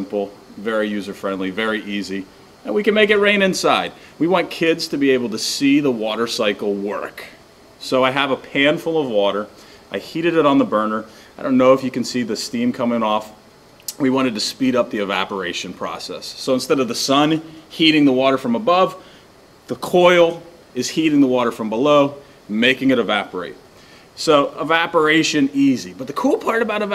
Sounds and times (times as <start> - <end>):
Speech: 0.0 - 19.0, 19.7 - 23.6, 24.2 - 26.9.